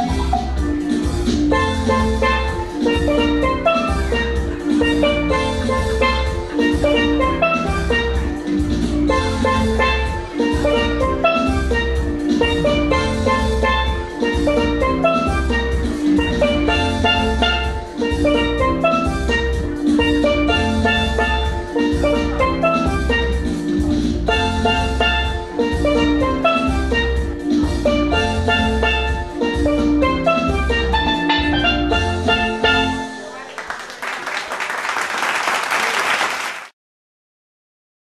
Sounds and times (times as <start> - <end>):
Steelpan: 0.0 - 33.4.